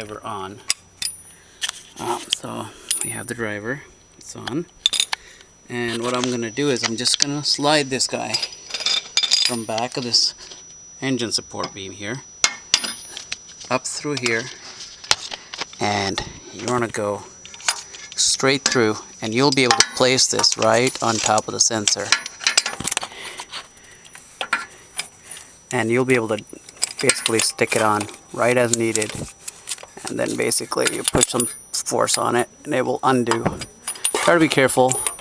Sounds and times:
Speech: 0.0s - 0.6s, 2.0s - 4.7s, 5.7s - 8.5s, 9.5s - 10.4s, 11.0s - 12.3s, 13.7s - 14.5s, 15.8s - 17.3s, 18.2s - 22.1s, 25.7s - 29.3s, 30.0s - 35.1s.

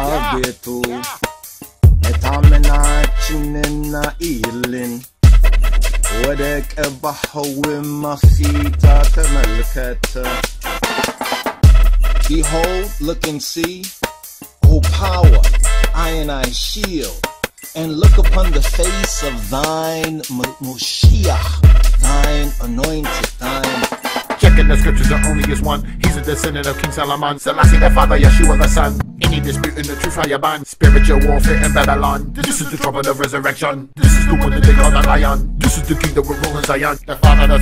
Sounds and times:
Speech: 0.0s - 1.2s, 2.1s - 5.1s, 6.1s - 10.4s, 12.3s - 13.9s, 14.6s - 17.2s, 17.8s - 21.5s, 22.1s - 23.8s, 31.8s - 33.9s
Hip hop music: 0.0s - 37.6s.

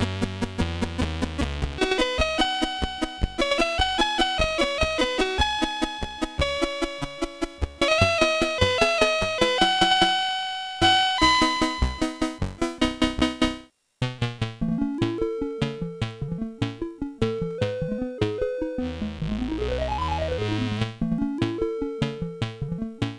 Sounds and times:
Video game music: 0.0s - 23.1s.

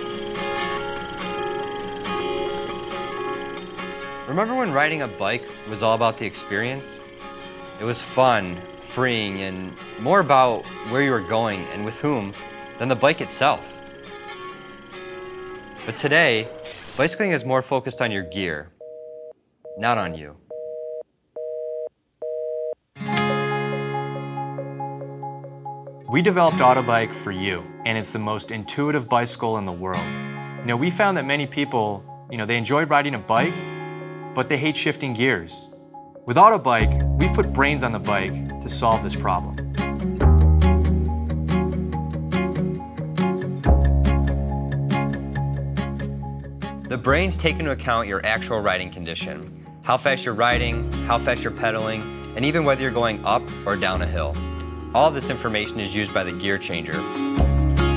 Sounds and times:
Music: 0.0s - 18.0s, 23.0s - 57.9s
Speech: 4.3s - 7.0s, 7.8s - 13.6s, 15.9s - 18.7s, 19.8s - 20.4s, 26.1s - 30.0s, 30.7s - 33.5s, 34.4s - 35.7s, 36.3s - 39.6s, 46.9s - 54.4s, 55.0s - 57.0s.

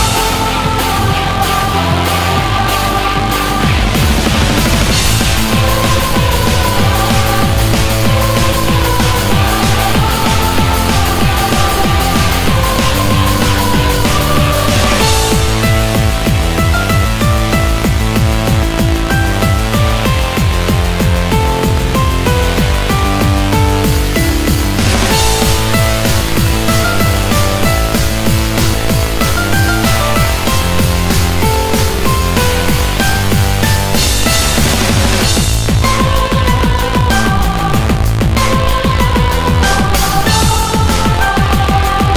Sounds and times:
Music: 0.0s - 42.1s.

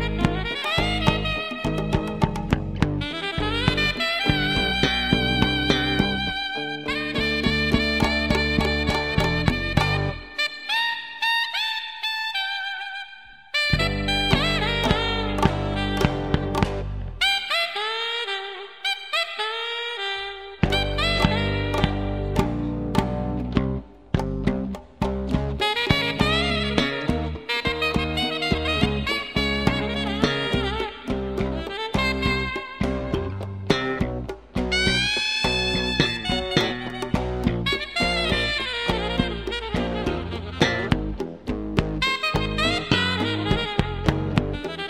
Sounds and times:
Music: 0.0s - 44.9s.

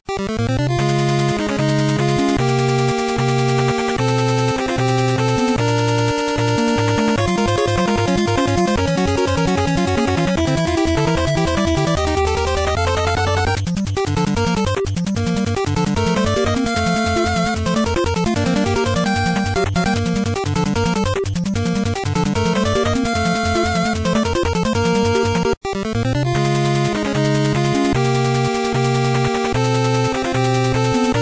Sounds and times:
Music: 0.1s - 31.2s.

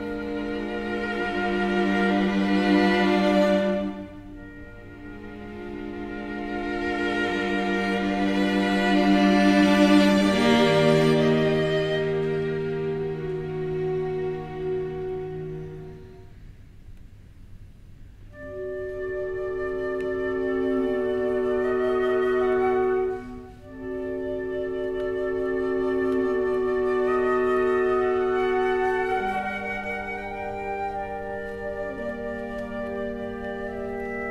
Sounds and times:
Violin, fiddle: 0.0s - 16.1s.

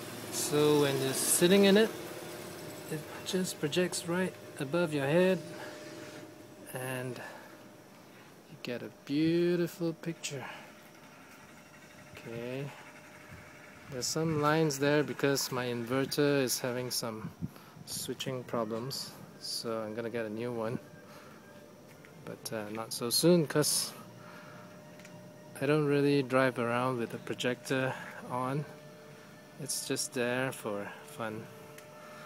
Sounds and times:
Speech: 0.4s - 2.0s, 2.9s - 5.5s, 6.7s - 7.3s, 8.5s - 10.6s, 12.2s - 12.8s, 13.9s - 17.3s, 17.9s - 20.8s, 22.2s - 24.0s, 25.6s - 28.7s, 29.6s - 31.5s.

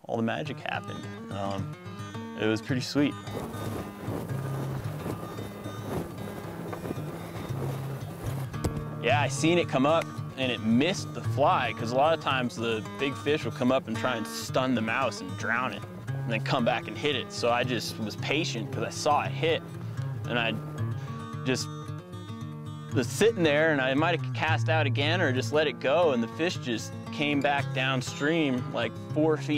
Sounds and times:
Speech: 0.0s - 1.7s, 2.4s - 3.2s, 9.0s - 19.6s, 20.3s - 20.6s, 21.5s - 21.7s, 23.0s - 29.5s
Music: 0.0s - 29.5s.

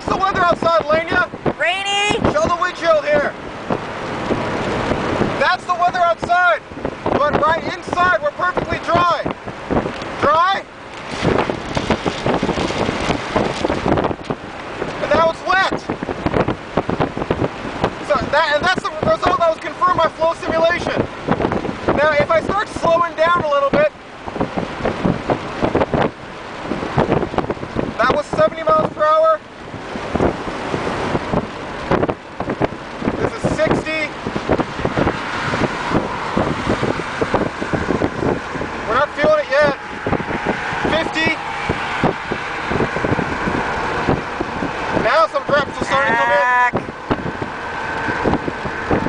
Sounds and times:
Speech: 0.0s - 3.4s, 5.4s - 6.6s, 7.2s - 9.3s, 10.2s - 10.7s, 15.0s - 15.9s, 18.0s - 21.0s, 22.0s - 23.9s, 28.0s - 29.4s, 33.2s - 34.1s, 38.9s - 39.8s, 40.9s - 41.4s, 45.0s - 46.8s.

